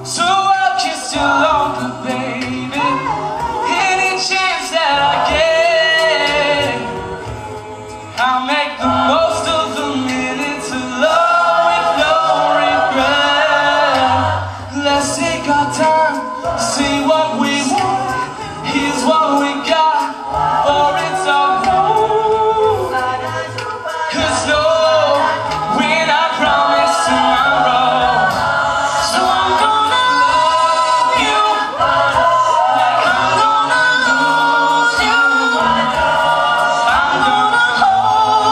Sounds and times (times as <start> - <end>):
Choir: 0.0 - 38.5
Inside, large room or hall: 0.0 - 38.5.